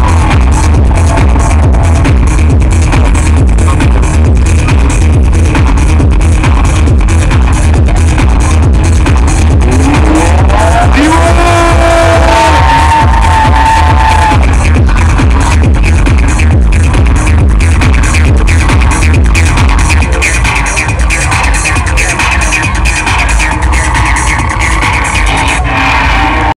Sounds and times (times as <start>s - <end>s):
Techno: 0.0s - 26.5s.